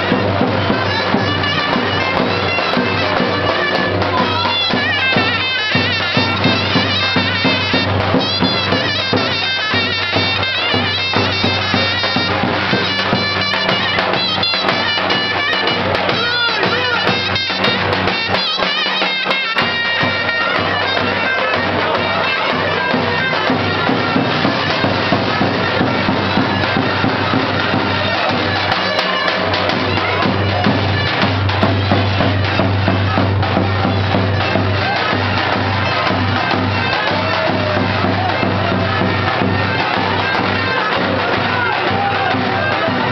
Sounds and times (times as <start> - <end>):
Music: 0.0 - 43.1.